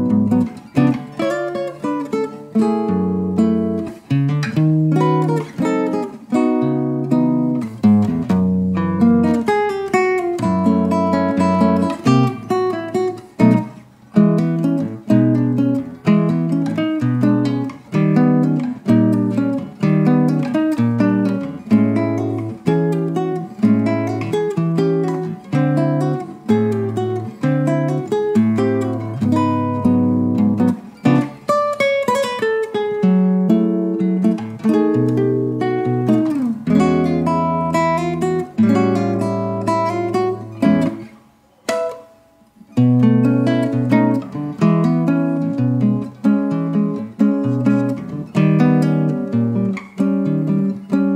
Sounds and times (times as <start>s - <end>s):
Acoustic guitar: 0.0s - 51.1s.